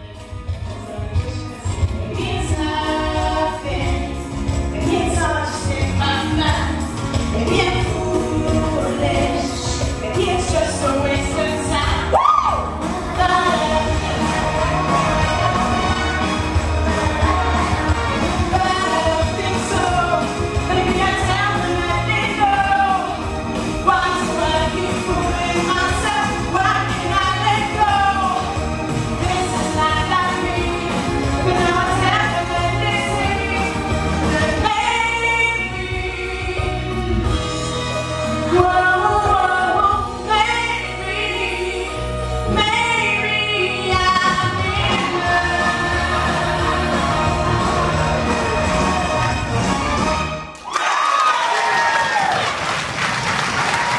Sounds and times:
Music: 0:00.0 - 0:53.9
Female singing: 0:00.7 - 0:12.1, 0:12.8 - 0:16.1, 0:16.9 - 0:28.6, 0:29.2 - 0:37.3, 0:38.5 - 0:48.9.

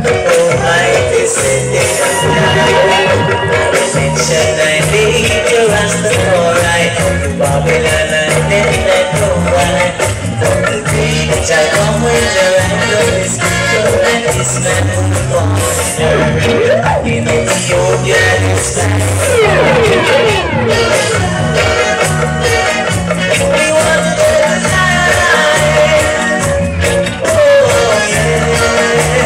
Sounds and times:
Music: 0:00.0 - 0:29.2.

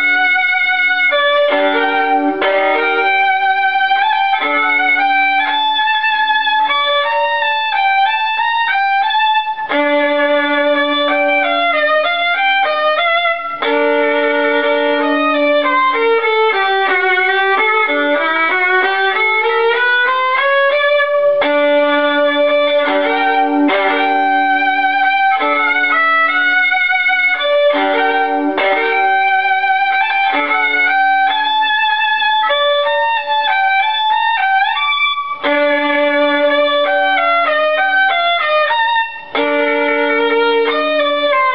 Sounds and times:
Violin, fiddle: 0:00.0 - 0:41.5.

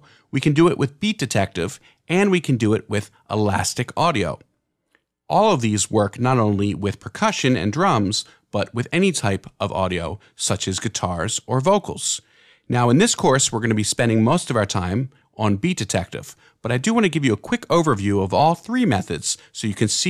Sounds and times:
Speech: 0:00.0 - 0:04.5, 0:05.3 - 0:20.0.

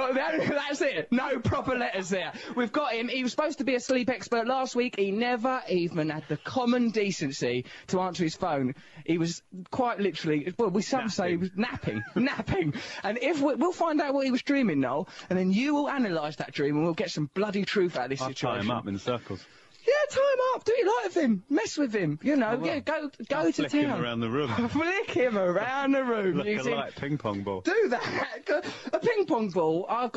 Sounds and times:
Speech: 0:00.0 - 0:30.1.

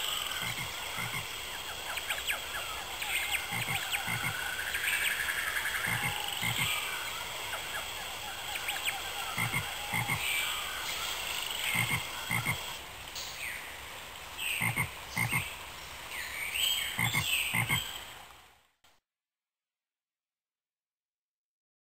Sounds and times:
Croak: 0:00.0 - 0:10.8, 0:11.4 - 0:12.8, 0:14.6 - 0:15.5, 0:17.0 - 0:17.9.

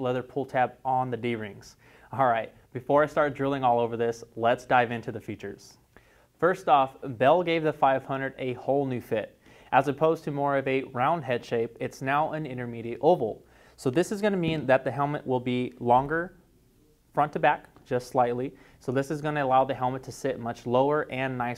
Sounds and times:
Speech: 0:00.0 - 0:05.8, 0:06.4 - 0:16.4, 0:17.1 - 0:21.5.

